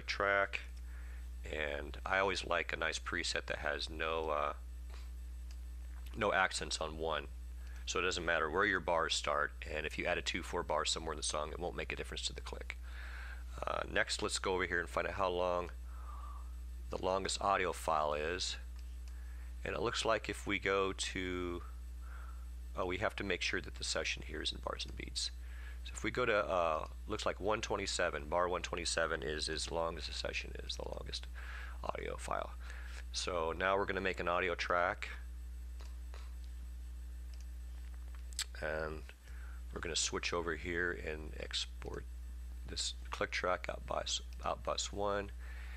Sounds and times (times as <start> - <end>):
Speech: 0.0 - 0.7, 1.5 - 4.6, 6.1 - 7.3, 7.9 - 12.8, 13.6 - 15.8, 16.9 - 18.7, 19.6 - 21.7, 22.8 - 35.2, 38.4 - 42.1, 42.7 - 45.4.